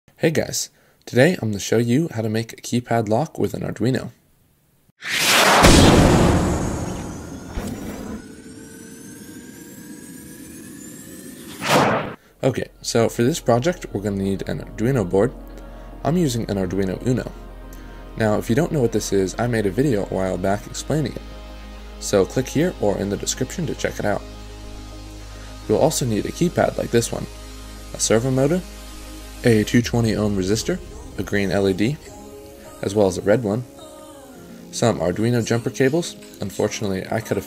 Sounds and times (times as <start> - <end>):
Speech: 0.2 - 4.2, 12.4 - 15.4, 16.0 - 17.4, 18.2 - 21.2, 22.0 - 24.2, 25.7 - 27.3, 28.0 - 28.6, 29.4 - 32.1, 32.8 - 33.7, 34.8 - 37.4.